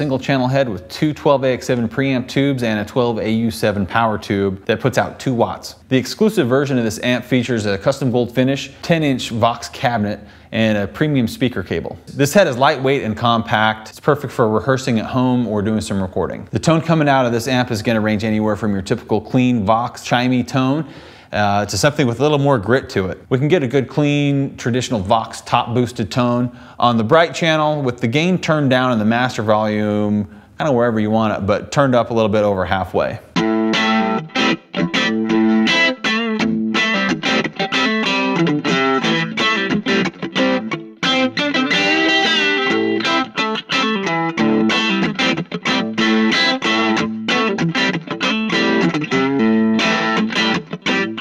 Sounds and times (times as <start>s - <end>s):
Speech: 0.0s - 33.4s
Distortion: 0.0s - 51.2s
Effects unit: 33.3s - 51.2s
Electric guitar: 33.3s - 51.2s.